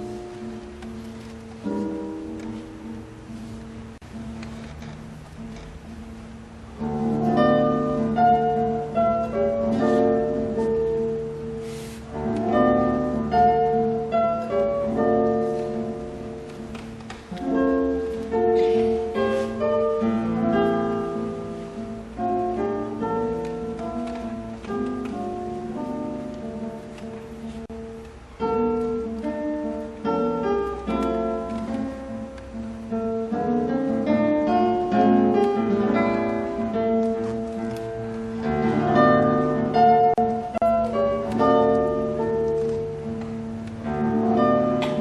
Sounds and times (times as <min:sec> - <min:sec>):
Acoustic guitar: 0:00.0 - 0:45.0.